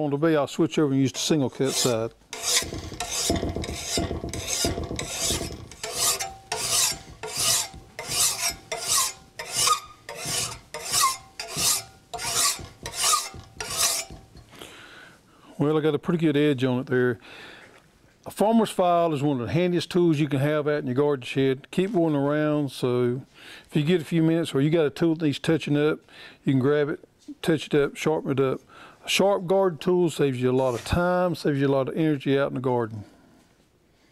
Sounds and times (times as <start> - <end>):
Filing (rasp): 1.2 - 14.3, 30.7 - 31.0
Rub: 1.2 - 14.3, 30.6 - 31.0.